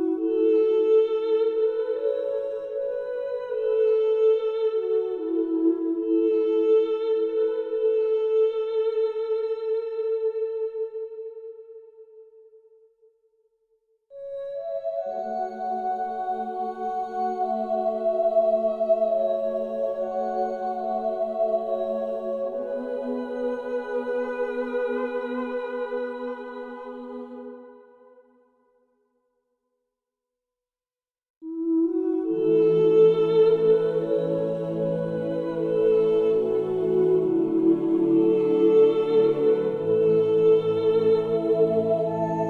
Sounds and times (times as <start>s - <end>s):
New-age music: 14.3s - 27.8s, 31.5s - 42.5s.